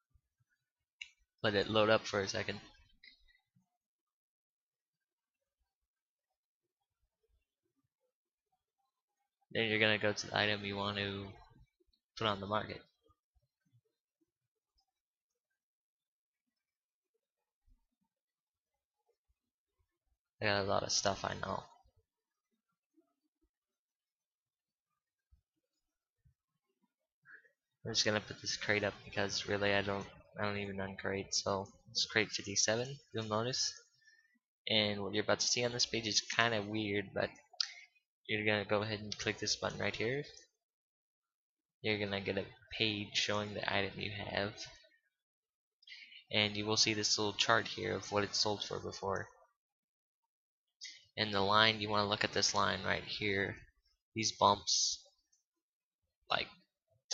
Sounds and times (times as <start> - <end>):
Speech: 1.4 - 2.9, 9.5 - 11.6, 12.2 - 13.0, 20.4 - 21.9, 27.8 - 34.0, 34.6 - 40.6, 41.8 - 45.0, 46.0 - 49.6, 50.8 - 55.2, 56.3 - 57.1.